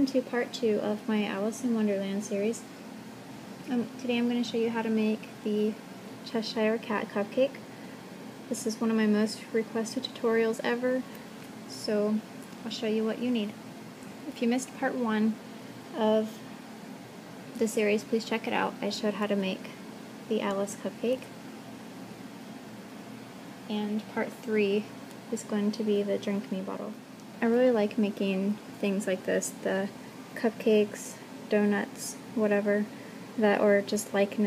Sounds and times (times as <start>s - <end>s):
Speech: 0.0s - 2.7s, 3.7s - 7.6s, 8.5s - 13.6s, 14.2s - 16.4s, 17.6s - 21.3s, 23.7s - 34.4s.